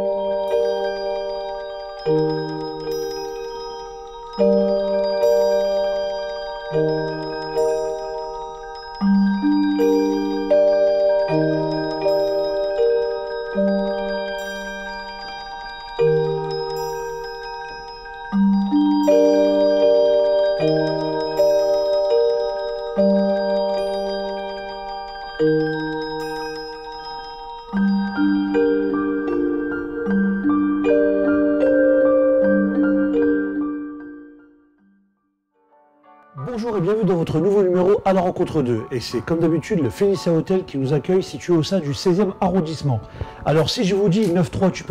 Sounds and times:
Marimba, xylophone: 0:00.0 - 0:34.8, 0:36.4 - 0:44.9
Glockenspiel: 0:00.0 - 0:35.2, 0:36.2 - 0:44.9.

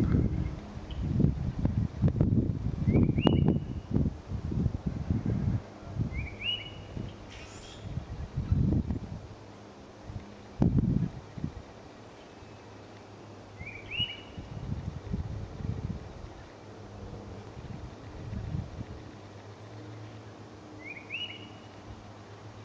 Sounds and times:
Outside, rural or natural: 0:00.0 - 0:22.6.

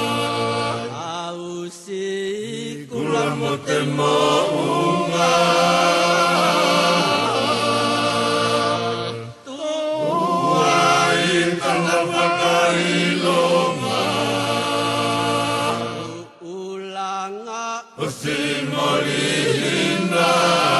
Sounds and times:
Mantra: 0:00.0 - 0:20.7.

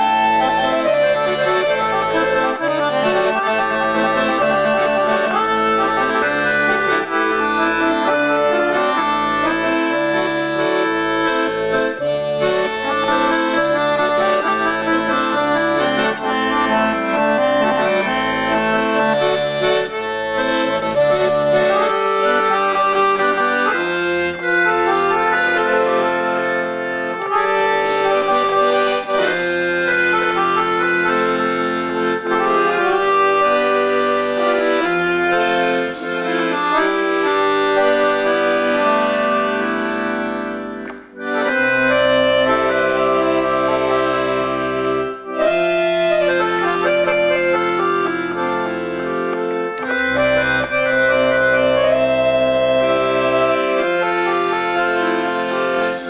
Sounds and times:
Accordion: 0:00.0 - 0:56.1.

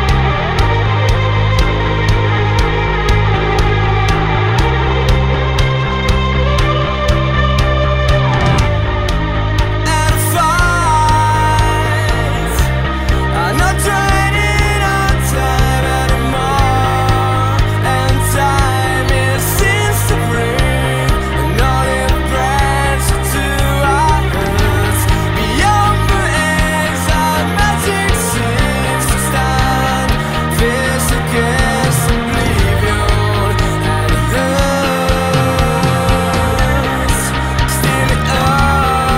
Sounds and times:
Music: 0:00.0 - 0:39.1.

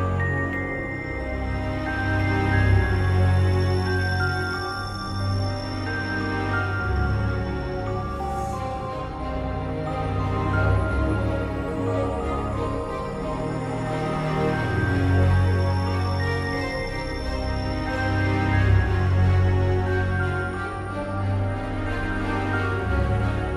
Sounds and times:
Music: 0:00.0 - 0:23.5.

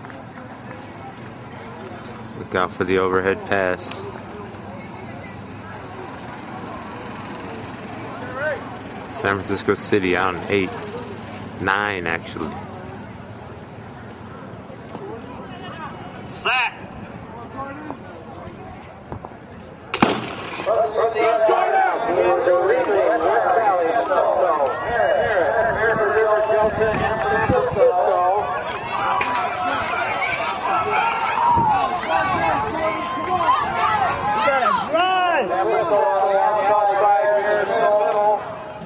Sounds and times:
Run: 0:00.0 - 0:09.0, 0:20.7 - 0:38.8
Outside, urban or manmade: 0:00.0 - 0:38.8.

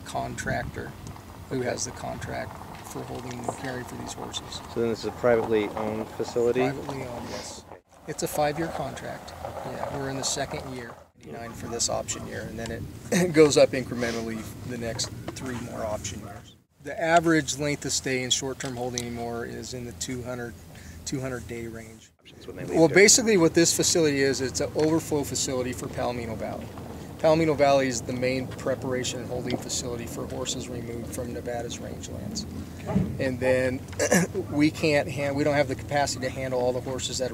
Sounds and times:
Speech: 0:00.0 - 0:20.5, 0:21.1 - 0:32.5, 0:33.2 - 0:37.3.

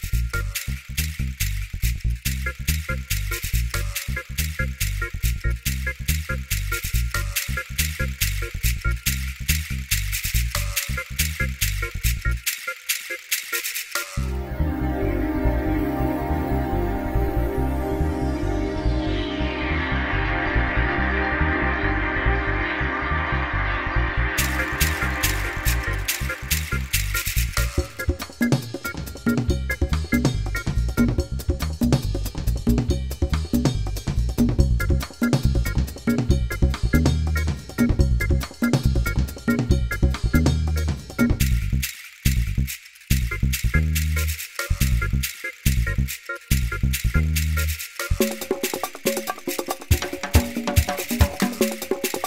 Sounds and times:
Music: 0:00.0 - 0:52.2.

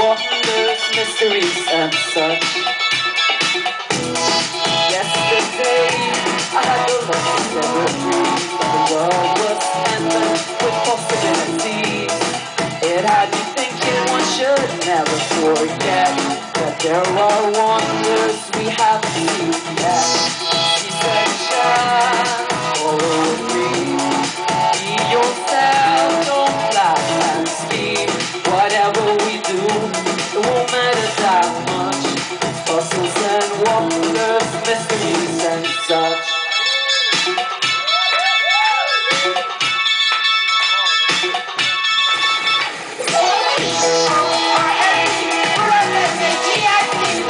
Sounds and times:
Music: 0:00.0 - 0:47.3.

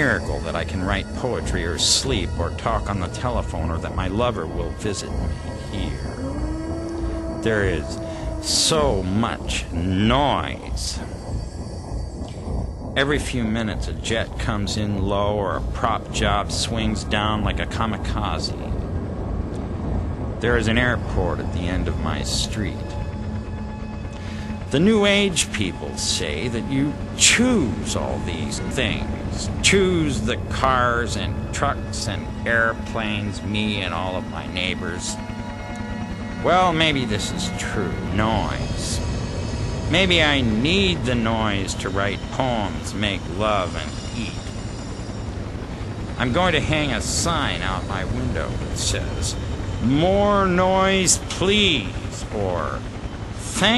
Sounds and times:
Speech: 0:00.0 - 0:06.2, 0:07.4 - 0:11.1, 0:13.0 - 0:18.8, 0:20.4 - 0:23.0, 0:24.7 - 0:35.2, 0:36.4 - 0:39.0, 0:39.9 - 0:44.5, 0:46.2 - 0:52.8, 0:53.4 - 0:53.7
Music: 0:00.0 - 0:53.7.

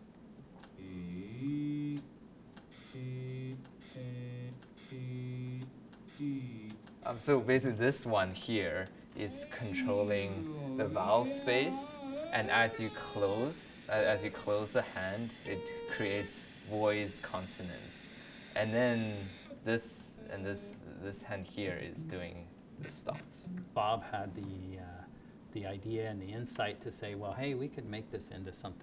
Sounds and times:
Speech: 0:06.2 - 0:28.8.

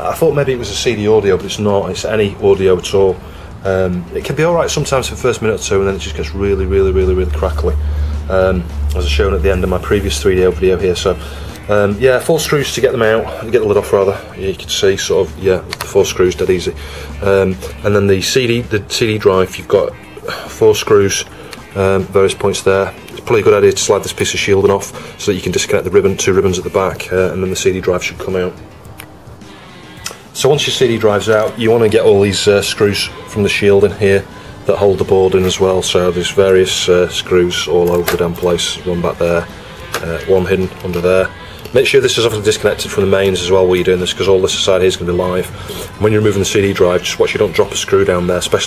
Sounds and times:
Speech: 0:00.0 - 0:28.6, 0:30.4 - 0:48.6
Music: 0:00.0 - 0:48.6.

